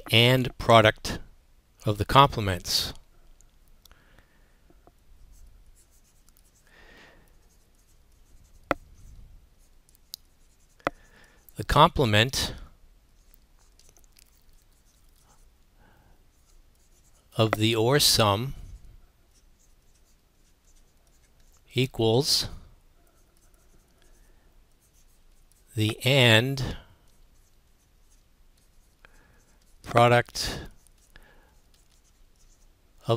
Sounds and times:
Speech: 0:00.0 - 0:01.2, 0:01.8 - 0:03.0, 0:11.6 - 0:12.6, 0:17.4 - 0:18.6, 0:21.7 - 0:22.6, 0:25.8 - 0:26.8, 0:29.9 - 0:30.7.

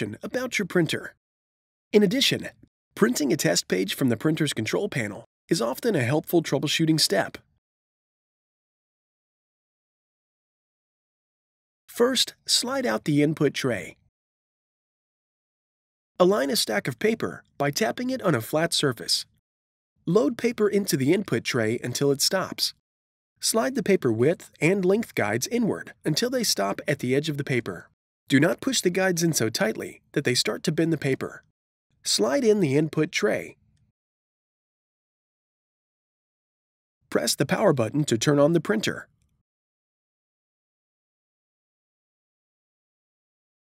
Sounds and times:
Speech: 0:00.0 - 0:01.2, 0:02.0 - 0:07.4, 0:11.9 - 0:14.0, 0:16.2 - 0:19.4, 0:20.1 - 0:22.8, 0:23.4 - 0:31.4, 0:32.0 - 0:33.6, 0:37.1 - 0:39.1.

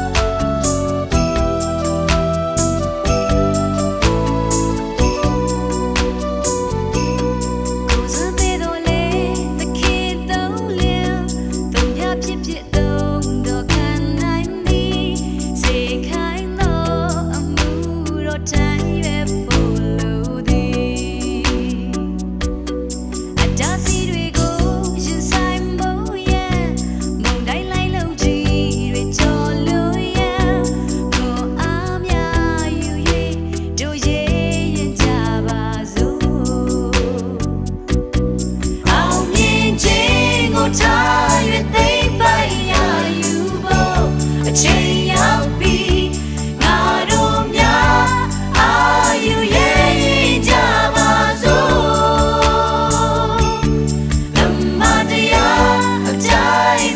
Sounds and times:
Gospel music: 0:00.0 - 0:56.9
Singing: 0:38.9 - 0:53.6, 0:54.4 - 0:56.9.

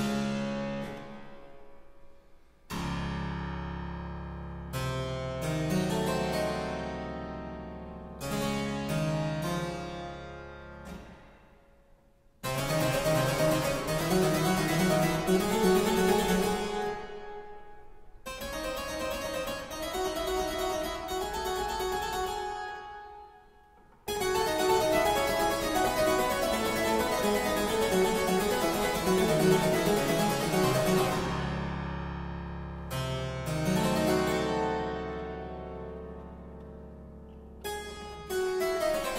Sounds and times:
Harpsichord: 0:02.7 - 0:11.2, 0:12.4 - 0:23.4, 0:24.0 - 0:39.1.

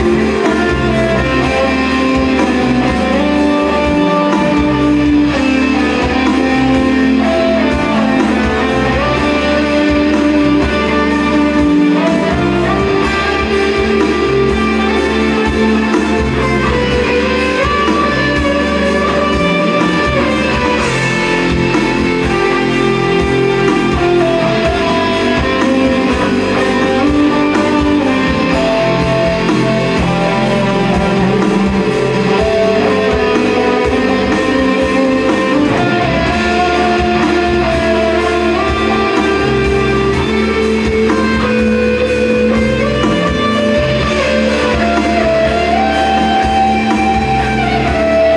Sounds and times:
Electric guitar: 0:00.0 - 0:48.3.

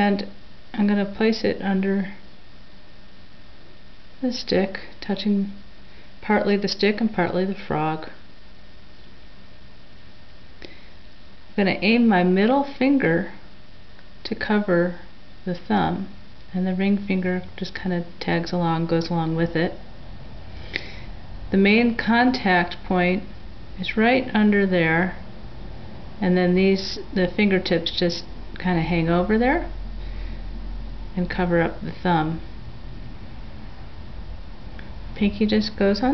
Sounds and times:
Speech: 0:00.0 - 0:02.2, 0:04.2 - 0:05.6, 0:06.2 - 0:08.2, 0:11.6 - 0:13.4, 0:14.2 - 0:19.8, 0:21.5 - 0:25.2, 0:26.2 - 0:29.8, 0:31.2 - 0:32.5, 0:35.2 - 0:36.1.

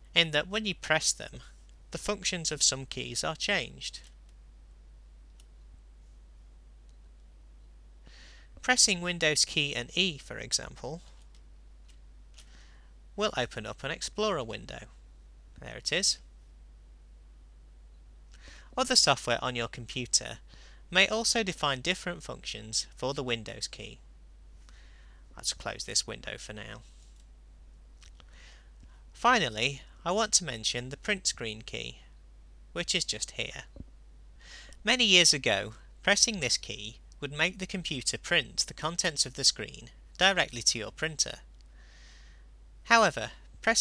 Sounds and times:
Speech: 0:00.1 - 0:04.1, 0:08.6 - 0:11.1, 0:13.2 - 0:15.0, 0:15.6 - 0:16.3, 0:18.8 - 0:24.0, 0:25.4 - 0:26.9, 0:29.2 - 0:32.1, 0:32.8 - 0:33.7, 0:34.8 - 0:41.5, 0:42.9 - 0:43.8.

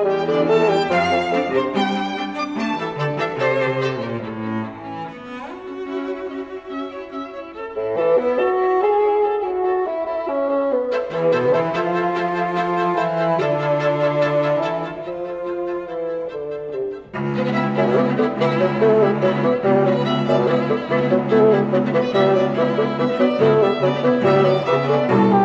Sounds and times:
Cello: 0:00.0 - 0:25.4
Violin, fiddle: 0:00.0 - 0:25.4
Double bass: 0:11.0 - 0:25.4.

